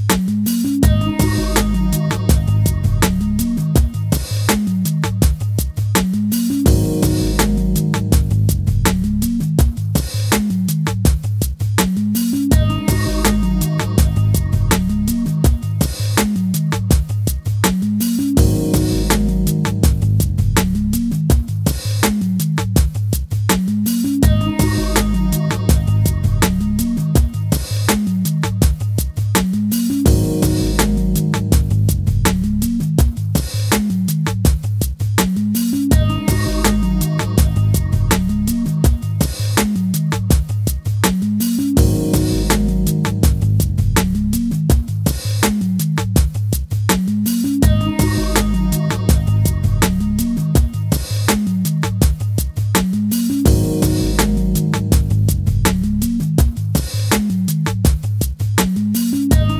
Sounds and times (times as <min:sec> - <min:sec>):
Music: 0:00.0 - 0:59.6.